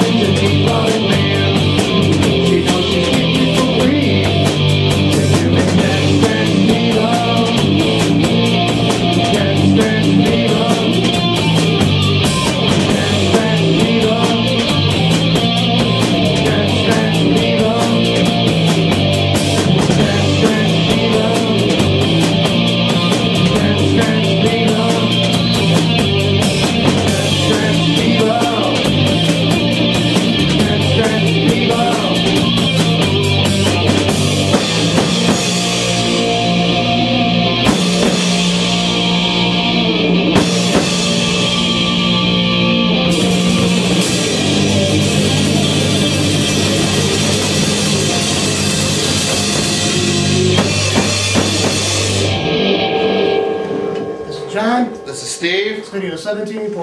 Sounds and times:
Rock music: 0.0 - 56.8.

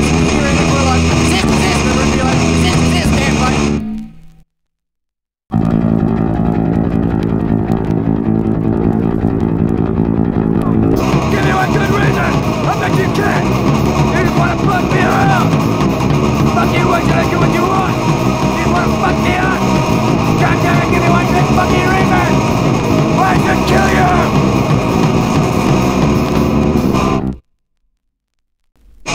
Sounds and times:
Punk rock: 0.0 - 3.8, 7.2 - 27.4.

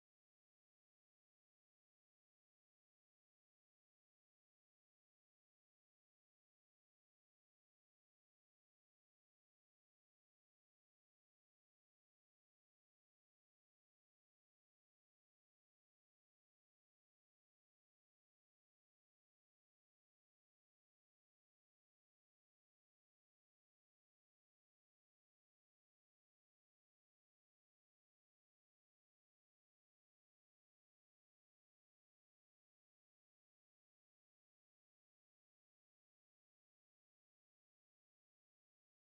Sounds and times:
Silence: 0.0 - 39.1.

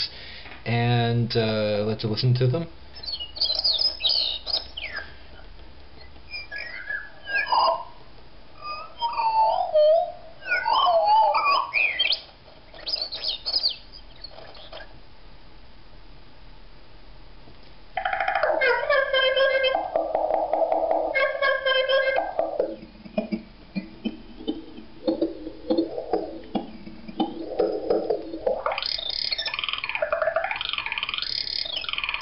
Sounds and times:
Chirp, tweet: 3.0 - 5.1, 8.6 - 14.9, 28.8 - 32.2.

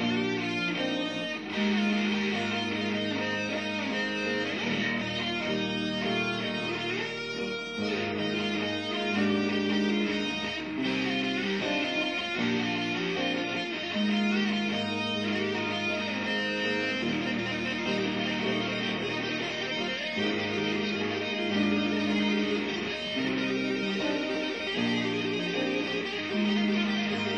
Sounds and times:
Electric guitar: 0.0 - 27.3.

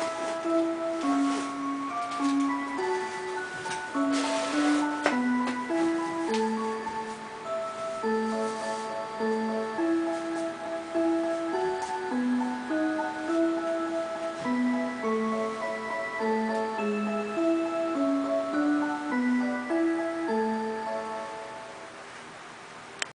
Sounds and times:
Music: 0.0 - 22.1.

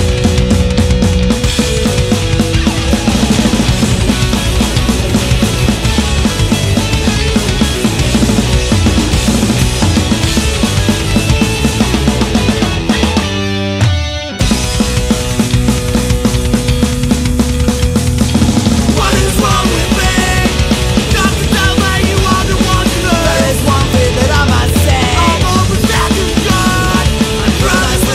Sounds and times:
Music: 0.0 - 28.1.

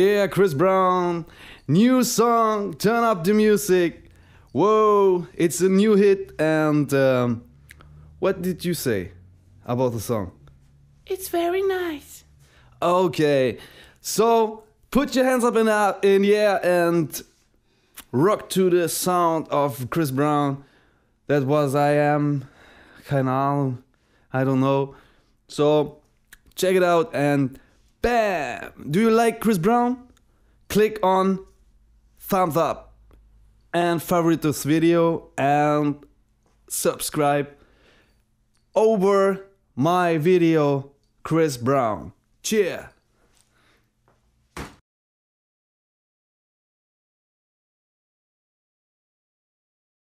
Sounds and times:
Speech: 0.0 - 7.5, 8.2 - 10.4, 11.1 - 12.2, 12.8 - 17.3, 18.0 - 20.6, 21.3 - 30.1, 30.7 - 31.5, 32.2 - 32.9, 33.7 - 36.1, 36.7 - 37.6, 38.8 - 43.0.

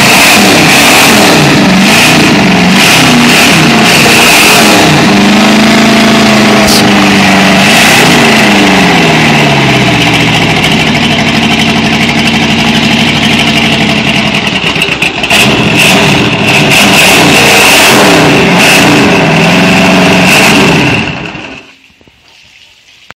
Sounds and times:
Motorboat, speedboat: 0.0 - 13.6, 14.4 - 21.7.

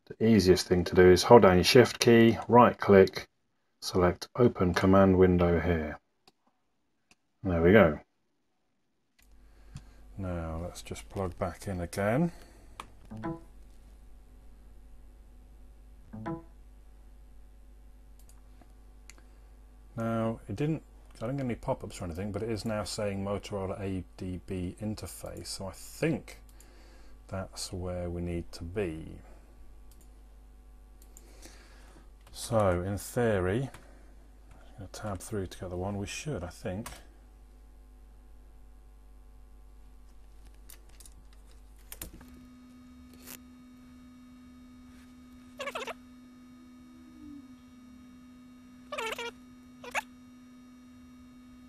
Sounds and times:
Inside, small room: 0.0 - 51.6
Speech: 0.1 - 6.0, 7.4 - 8.1, 10.2 - 12.4, 20.0 - 26.4, 27.3 - 29.3, 32.3 - 33.8, 34.8 - 37.1.

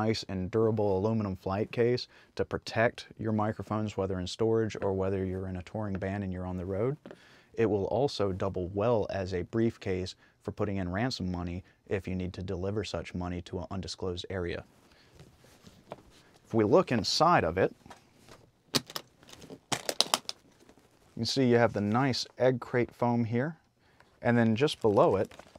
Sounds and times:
Speech: 0.0 - 7.0, 7.6 - 14.7, 16.5 - 17.8, 21.2 - 23.6, 24.2 - 25.4.

